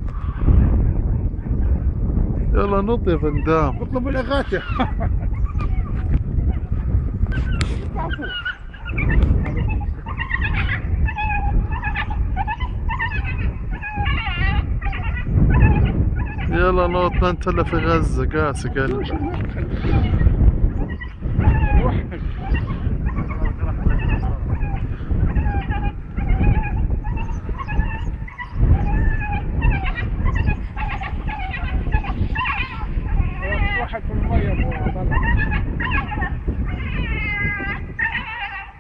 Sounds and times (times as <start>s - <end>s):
Speech: 2.6s - 4.6s, 16.5s - 19.5s, 33.4s - 35.2s
Whimper (dog): 4.5s - 6.7s, 7.4s - 16.5s, 20.9s - 38.8s.